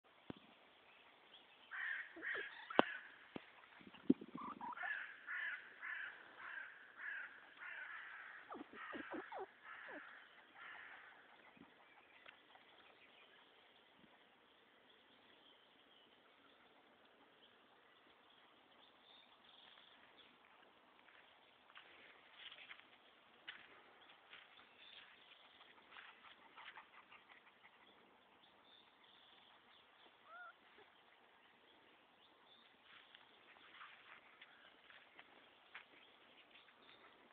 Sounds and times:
Animal: 1.7s - 13.5s, 24.8s - 31.1s.

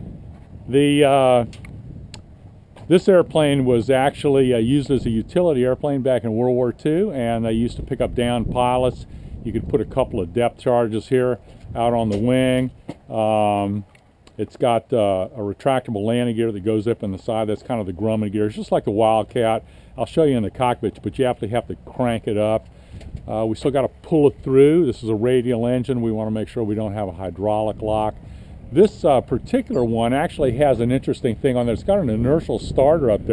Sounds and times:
Speech: 0.7s - 1.5s, 2.9s - 13.8s, 14.4s - 22.6s, 23.3s - 33.3s.

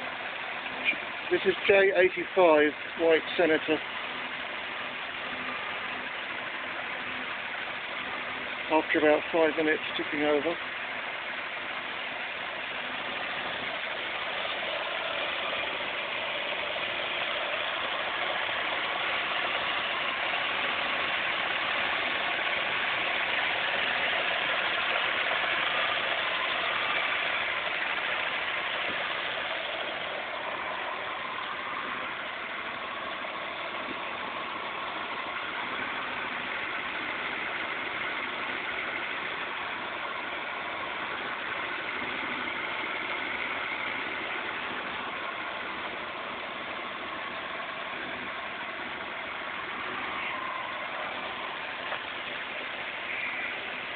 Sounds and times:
Engine: 0.0s - 53.9s
Vehicle: 0.0s - 53.9s.

